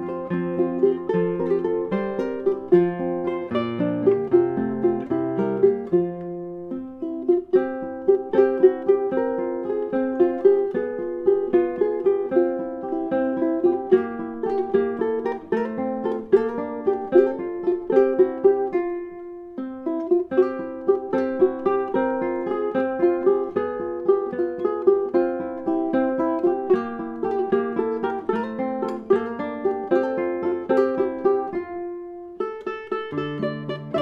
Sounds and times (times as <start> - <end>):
Strum: 0.0 - 34.0.